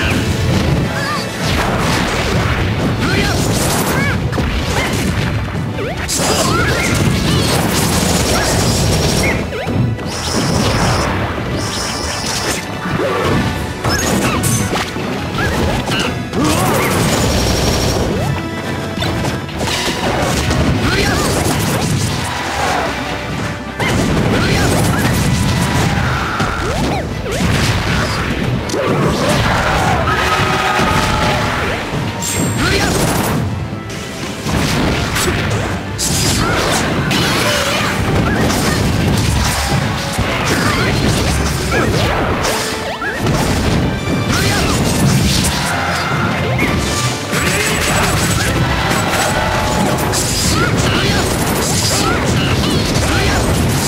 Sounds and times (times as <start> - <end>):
Music: 0.0 - 53.8.